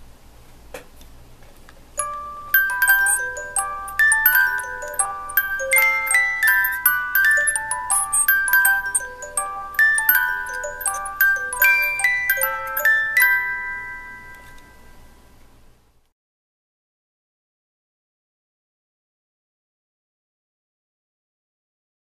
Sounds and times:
Wedding music: 2.0s - 15.1s.

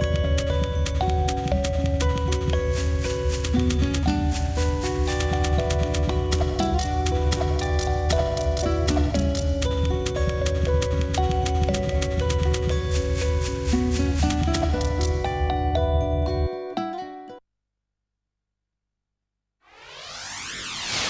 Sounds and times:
Music: 0.0s - 17.4s.

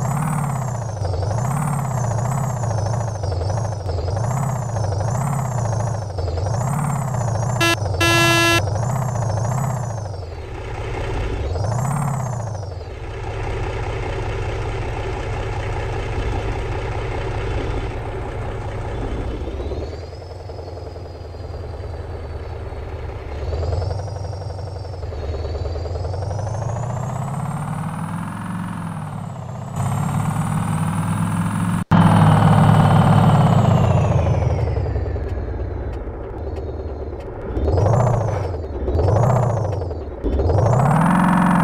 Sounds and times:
Truck: 0.0s - 41.6s.

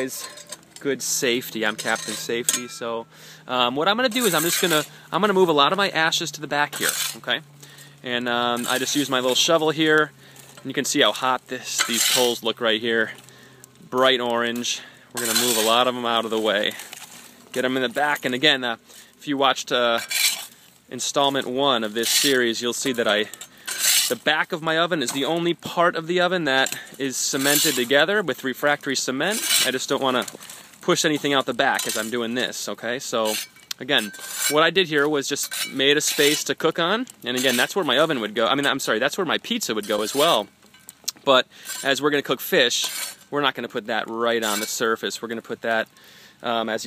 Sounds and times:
Speech: 0.0s - 7.4s, 8.0s - 13.2s, 13.9s - 16.8s, 17.6s - 20.1s, 20.9s - 23.4s, 24.1s - 40.5s, 41.2s - 46.8s.

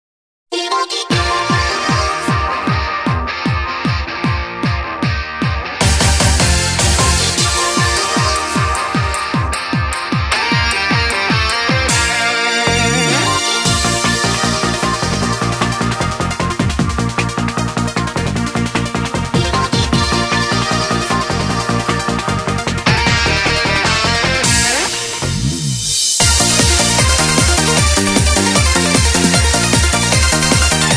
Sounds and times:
Soundtrack music: 5.8s - 30.9s.

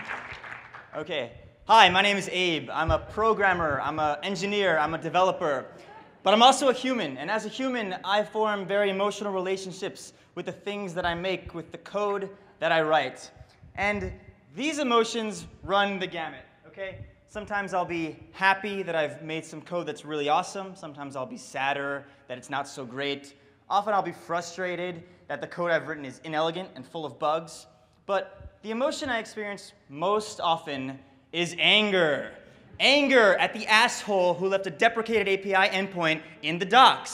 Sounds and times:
Speech: 1.0s - 37.1s.

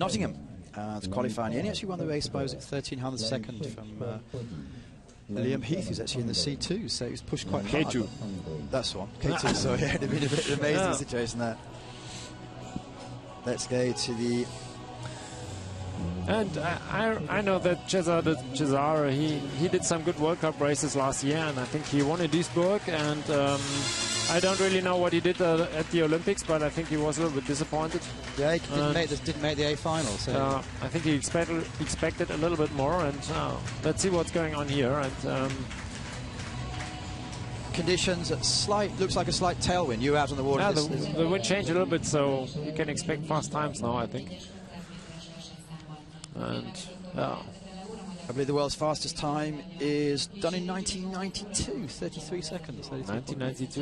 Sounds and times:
Speech: 0.0s - 11.6s, 16.2s - 23.6s, 24.3s - 35.6s, 37.8s - 53.8s.

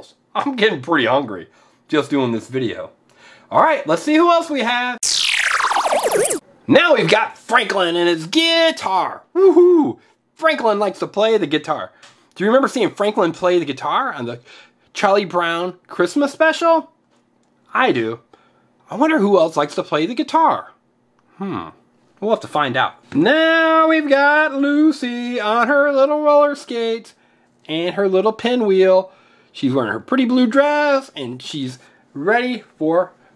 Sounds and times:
Speech: 0.0s - 5.0s, 6.7s - 17.0s, 17.7s - 20.8s, 21.4s - 33.2s.

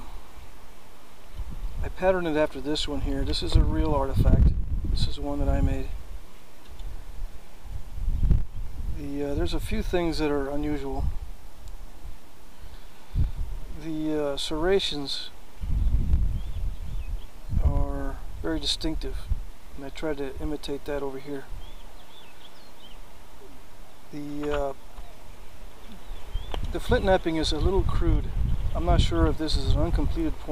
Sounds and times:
Speech: 1.8s - 6.0s, 9.0s - 11.1s, 13.8s - 15.4s, 17.6s - 21.5s, 24.2s - 24.8s, 26.7s - 30.5s.

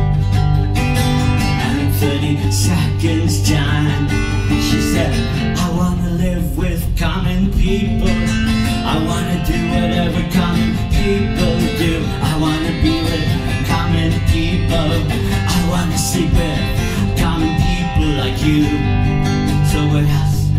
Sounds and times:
Music: 0.0s - 20.5s
Male singing: 1.5s - 20.5s.

